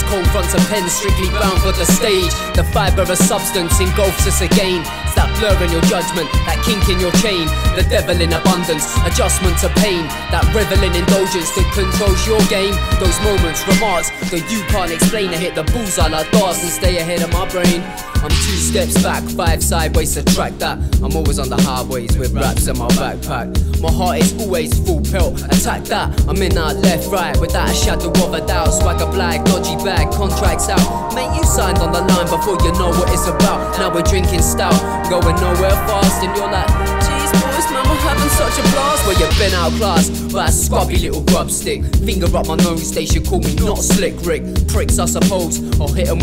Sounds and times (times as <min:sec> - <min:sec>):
Funk: 0:00.0 - 0:46.2.